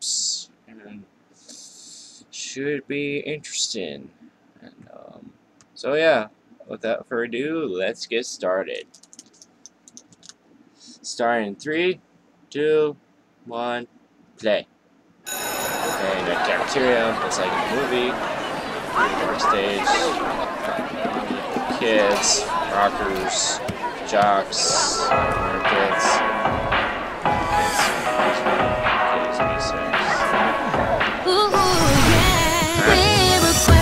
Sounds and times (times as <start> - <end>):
Speech: 0.0 - 1.1, 2.1 - 8.9, 11.0 - 14.7, 16.0 - 18.2, 19.0 - 26.2, 28.3 - 30.6.